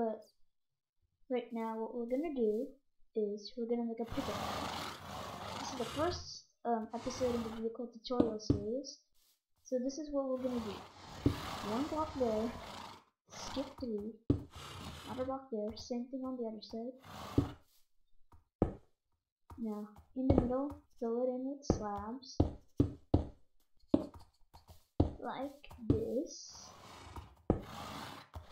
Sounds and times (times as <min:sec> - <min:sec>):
Speech: 0:00.0 - 0:00.2, 0:01.3 - 0:04.5, 0:05.6 - 0:09.0, 0:09.7 - 0:10.8, 0:11.6 - 0:12.6, 0:13.4 - 0:14.2, 0:15.1 - 0:17.0, 0:19.6 - 0:22.5, 0:25.2 - 0:26.7.